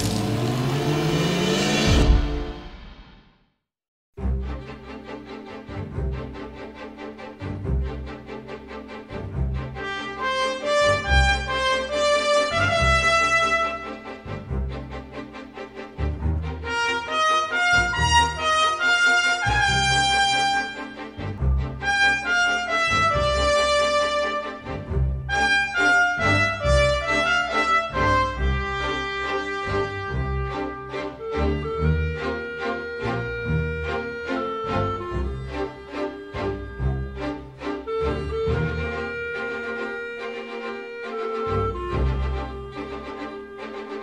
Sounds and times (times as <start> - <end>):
Music: 0.0 - 44.0.